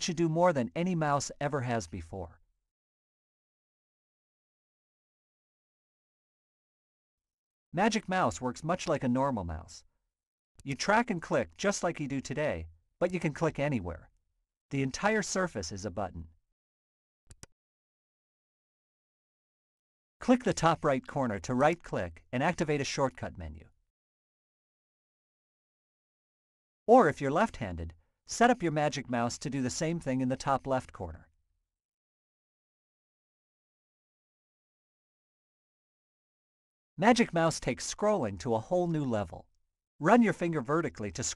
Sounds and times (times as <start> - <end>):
Speech: 0.0 - 2.4, 7.8 - 9.9, 10.6 - 14.1, 14.7 - 16.4, 20.2 - 23.8, 26.9 - 31.3, 37.0 - 41.3.